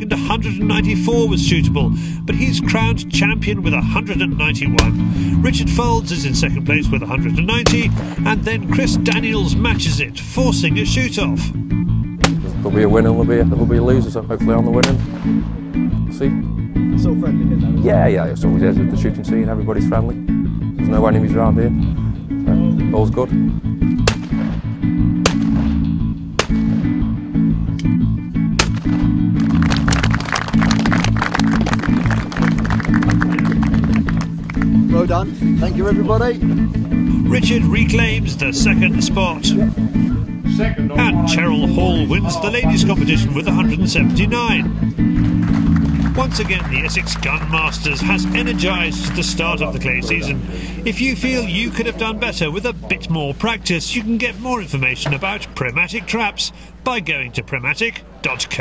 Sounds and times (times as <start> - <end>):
Gunshot, gunfire: 24.0 - 25.8, 26.4 - 27.0, 28.6 - 29.1.